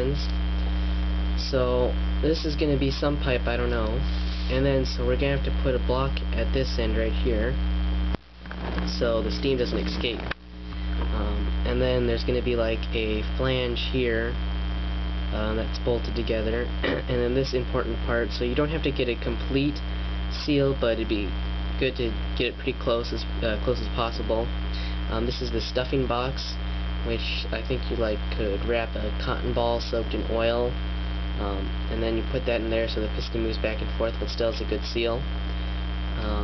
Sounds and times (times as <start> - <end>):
Speech: 0.0 - 0.4, 1.4 - 7.6, 8.8 - 10.4, 11.0 - 14.4, 15.3 - 30.8, 31.4 - 35.3, 36.2 - 36.4.